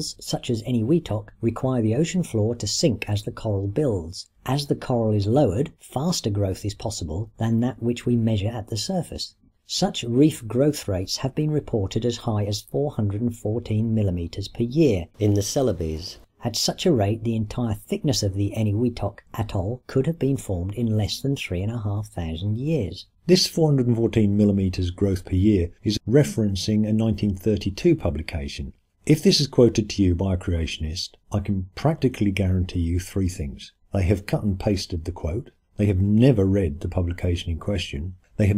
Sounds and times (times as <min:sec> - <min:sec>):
Narration, monologue: 0:00.0 - 0:38.5.